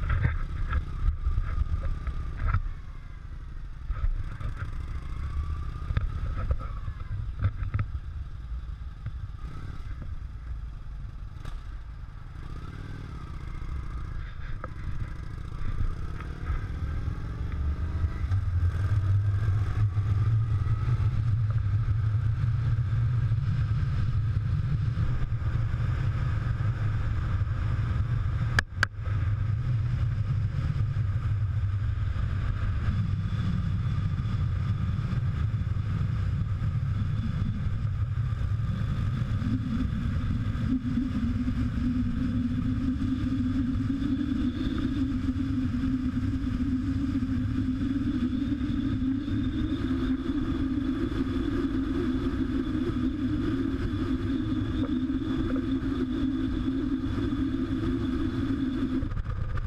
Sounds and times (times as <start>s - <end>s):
Vehicle: 0.0s - 59.6s.